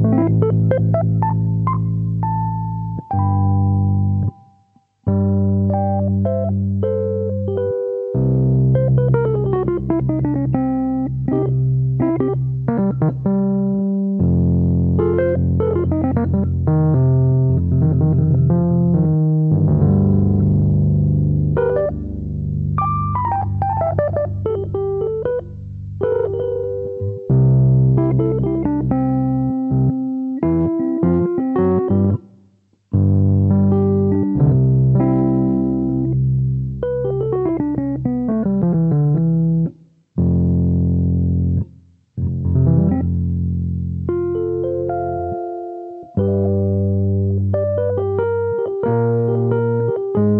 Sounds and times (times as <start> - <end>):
Electric piano: 0.0 - 50.3.